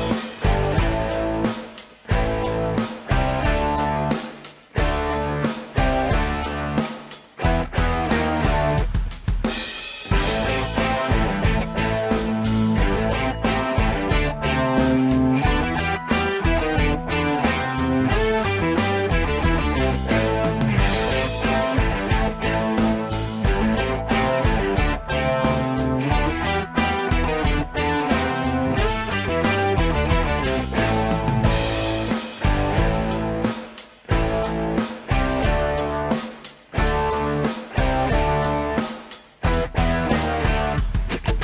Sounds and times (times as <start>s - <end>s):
Electric guitar: 0.0s - 41.4s.